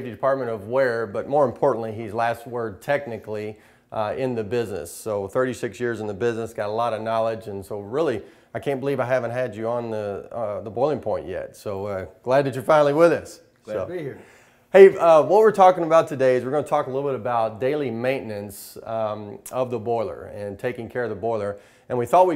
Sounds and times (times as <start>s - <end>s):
Speech: 0.0s - 22.3s.